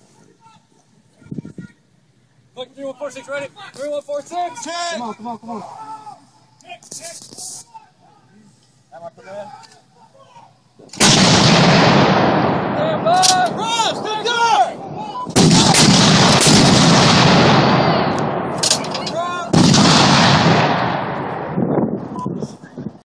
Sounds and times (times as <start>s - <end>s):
Artillery fire: 10.9s - 21.9s.